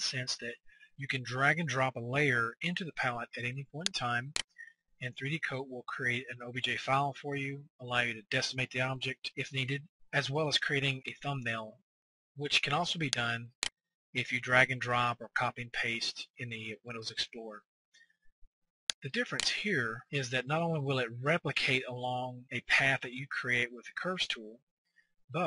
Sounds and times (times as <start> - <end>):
Speech: 0.0 - 4.4, 5.0 - 11.8, 12.4 - 13.6, 14.2 - 17.6, 19.0 - 24.6.